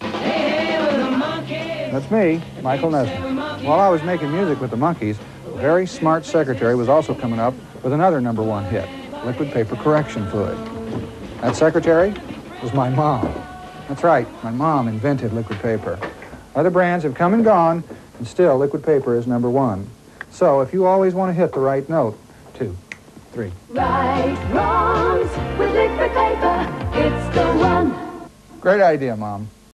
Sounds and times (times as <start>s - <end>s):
Music: 0.0s - 16.1s, 23.7s - 28.3s
Speech: 11.4s - 22.8s, 23.4s - 23.6s, 28.6s - 29.6s.